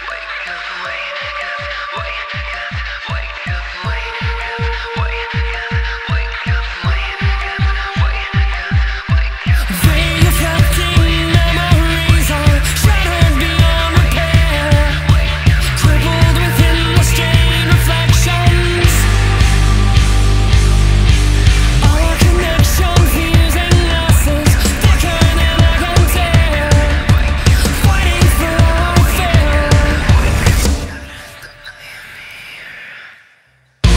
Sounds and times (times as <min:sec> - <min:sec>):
Singing: 0:00.0 - 0:20.8, 0:21.6 - 0:33.9
Sampler: 0:09.7 - 0:31.6.